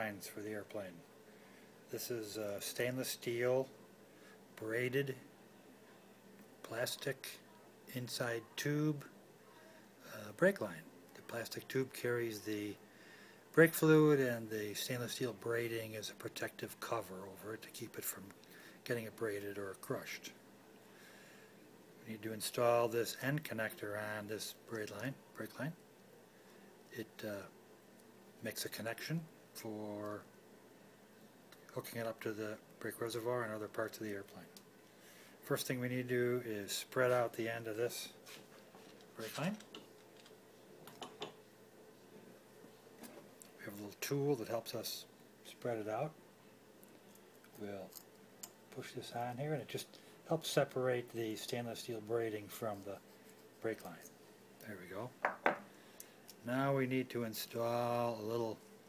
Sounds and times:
Speech: 0.0 - 1.1, 1.9 - 3.8, 4.6 - 5.3, 6.6 - 12.8, 13.5 - 20.4, 22.0 - 25.8, 26.9 - 27.6, 28.4 - 30.3, 31.7 - 34.6, 35.4 - 38.2, 39.2 - 39.7, 43.6 - 46.2, 47.6 - 48.0, 48.7 - 55.2, 56.4 - 58.6.

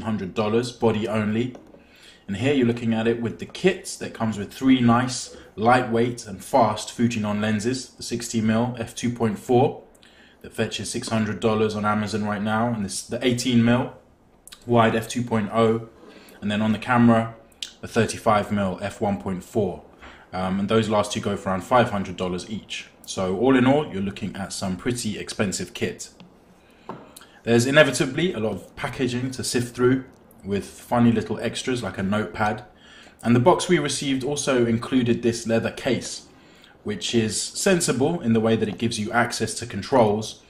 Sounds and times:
Speech: 0.0 - 1.7, 2.3 - 26.2, 27.4 - 40.4.

